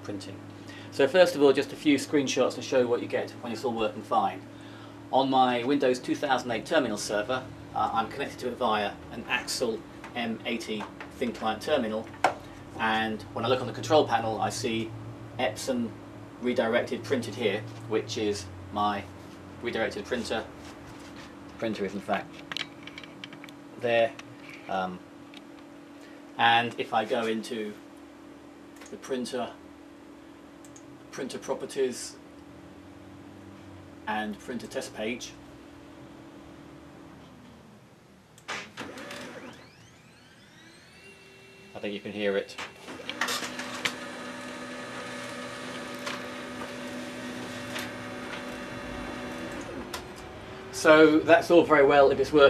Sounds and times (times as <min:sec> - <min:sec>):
Speech: 0:00.0 - 0:04.4, 0:05.1 - 0:12.1, 0:12.8 - 0:20.5, 0:21.6 - 0:22.3, 0:23.8 - 0:25.0, 0:26.4 - 0:27.8, 0:28.9 - 0:29.6, 0:31.1 - 0:32.2, 0:34.1 - 0:35.4, 0:41.8 - 0:42.6, 0:50.8 - 0:52.5.